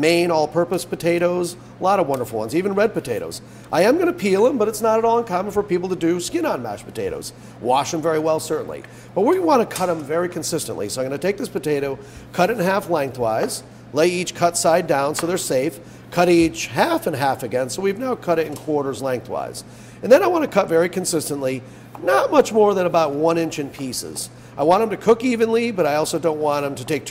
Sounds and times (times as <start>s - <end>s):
Speech: 0.0s - 27.1s.